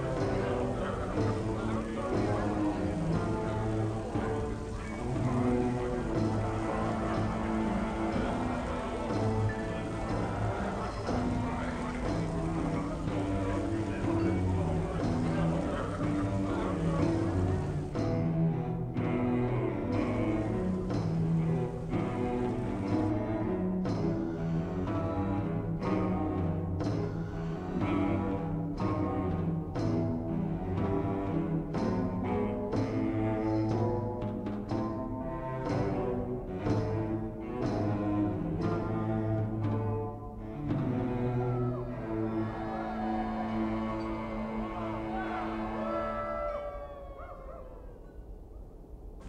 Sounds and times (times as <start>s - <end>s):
Speech: 0.0s - 29.4s
Music: 0.0s - 48.4s.